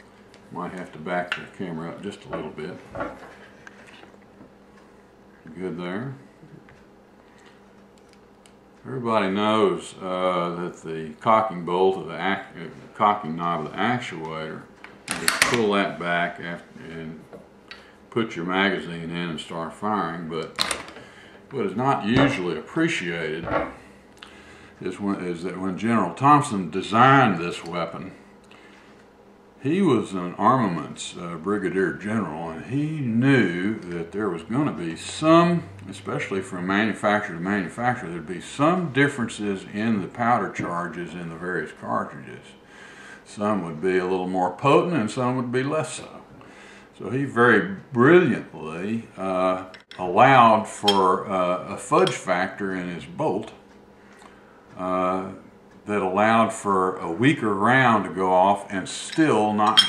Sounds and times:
Speech: 0:00.5 - 0:03.0, 0:05.4 - 0:06.6, 0:08.8 - 0:17.3, 0:18.1 - 0:20.6, 0:21.5 - 0:23.8, 0:24.8 - 0:28.2, 0:29.6 - 0:42.6, 0:43.2 - 0:53.6, 0:54.8 - 0:59.8.

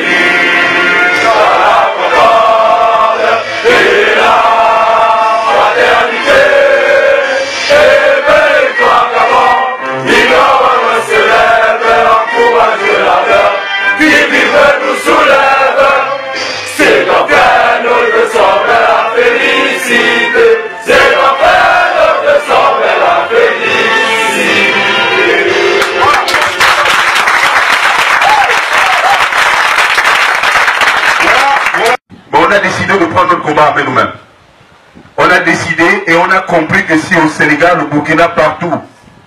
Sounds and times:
Music: 0:00.0 - 0:26.3.

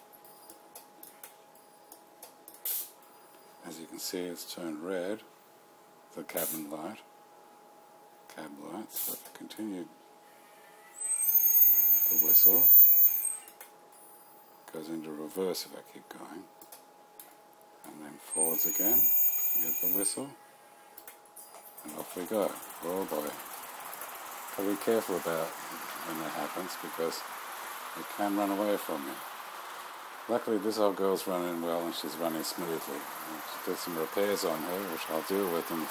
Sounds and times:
Speech: 0:03.6 - 0:05.3, 0:06.1 - 0:07.1, 0:08.3 - 0:09.9, 0:12.1 - 0:12.7, 0:14.7 - 0:16.5, 0:17.9 - 0:20.4, 0:21.8 - 0:23.4, 0:24.6 - 0:27.3, 0:28.0 - 0:29.2, 0:30.3 - 0:35.9
Train: 0:22.6 - 0:30.2.

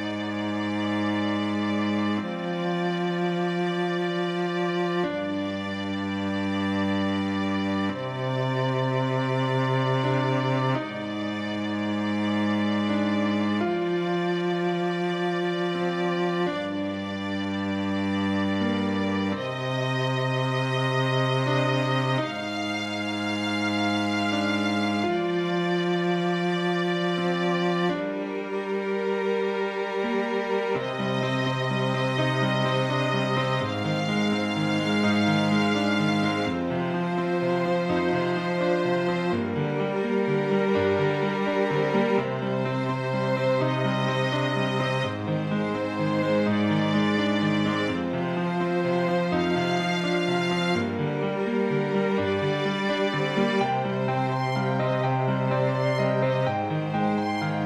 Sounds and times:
Violin, fiddle: 0:00.0 - 0:57.6.

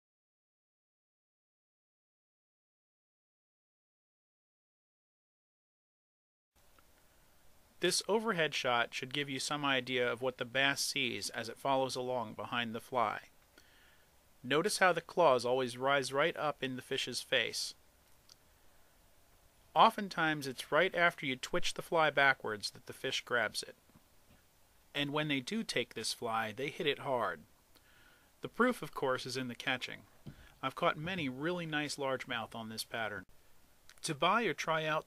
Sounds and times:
Speech: 0:07.8 - 0:13.3, 0:14.4 - 0:17.8, 0:19.8 - 0:23.8, 0:24.9 - 0:27.5, 0:28.4 - 0:33.3, 0:33.9 - 0:35.0.

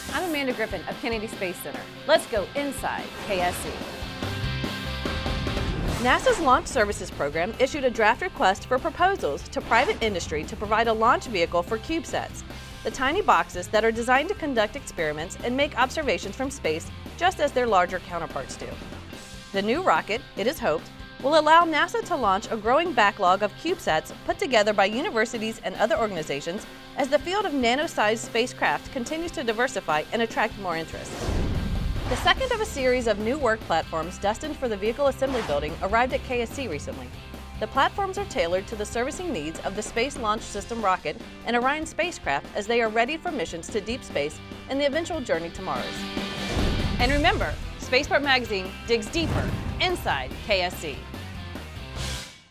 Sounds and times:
Music: 0:00.0 - 0:52.5
Speech: 0:00.1 - 0:03.8, 0:06.0 - 0:18.8, 0:19.6 - 0:31.1, 0:32.2 - 0:46.0, 0:47.0 - 0:51.0.

